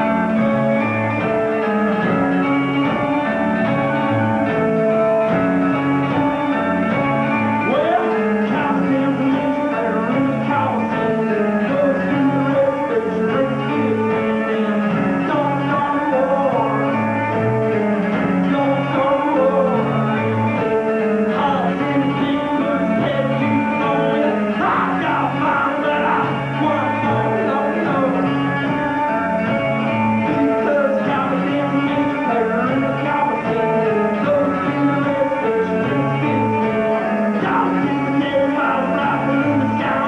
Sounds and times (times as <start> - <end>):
Music: 0.0 - 40.0.